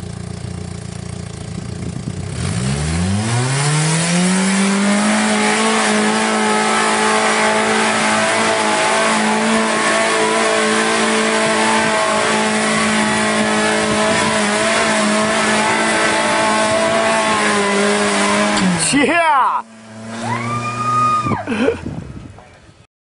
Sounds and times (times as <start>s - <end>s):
Car: 0.0s - 22.9s
Speech: 18.8s - 19.7s.